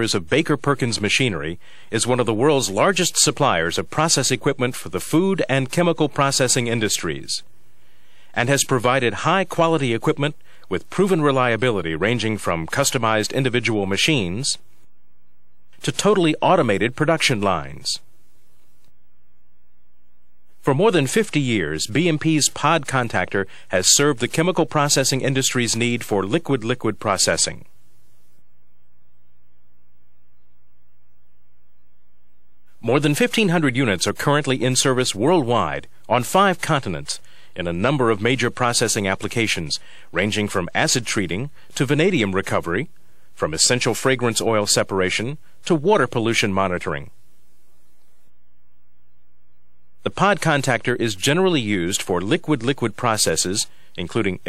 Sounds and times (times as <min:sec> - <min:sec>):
Speech: 0:00.0 - 0:07.5, 0:08.4 - 0:14.6, 0:15.8 - 0:18.1, 0:20.6 - 0:27.7, 0:32.8 - 0:47.2, 0:50.0 - 0:54.4.